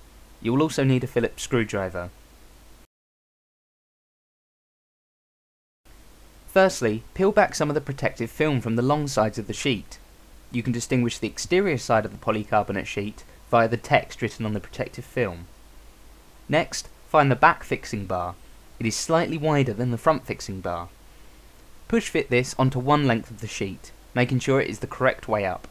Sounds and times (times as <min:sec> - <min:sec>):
Speech: 0:00.4 - 0:02.2, 0:06.5 - 0:15.5, 0:16.5 - 0:21.0, 0:21.9 - 0:25.7.